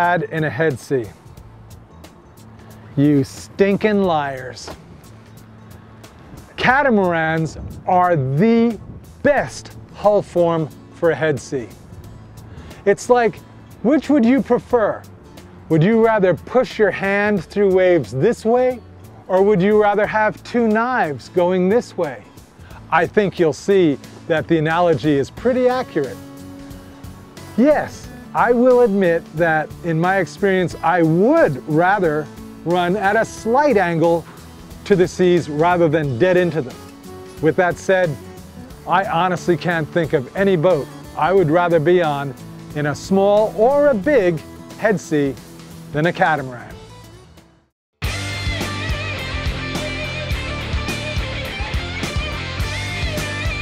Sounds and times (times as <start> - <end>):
Speech: 0.0 - 1.2, 3.0 - 4.8, 6.6 - 11.7, 12.9 - 15.0, 15.7 - 22.3, 22.9 - 26.2, 27.6 - 34.2, 34.9 - 36.8, 37.4 - 38.2, 38.8 - 45.4, 46.0 - 46.8
Music: 0.0 - 53.6.